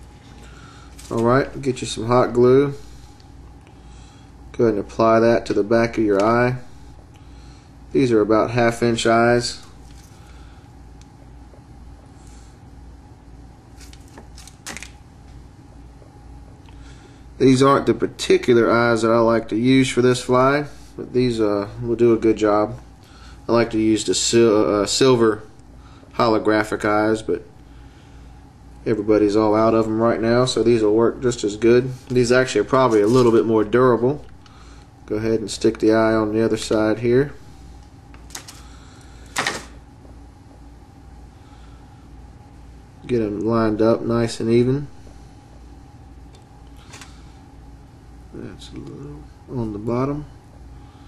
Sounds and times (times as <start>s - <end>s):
Speech: 1.1s - 2.8s, 4.5s - 6.7s, 7.9s - 9.7s, 17.4s - 22.8s, 23.5s - 25.5s, 26.2s - 27.5s, 28.8s - 34.3s, 35.1s - 37.4s, 43.0s - 45.0s, 48.3s - 50.4s.